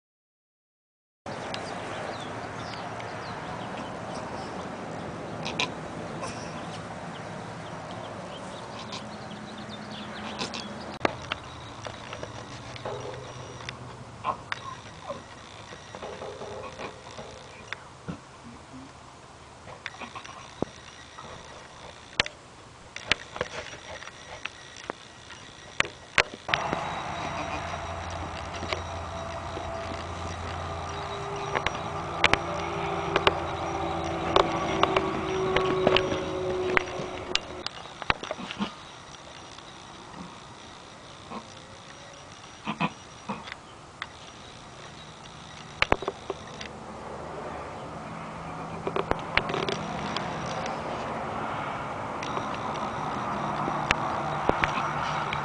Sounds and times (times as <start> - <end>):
Bleat: 27.1 - 30.2.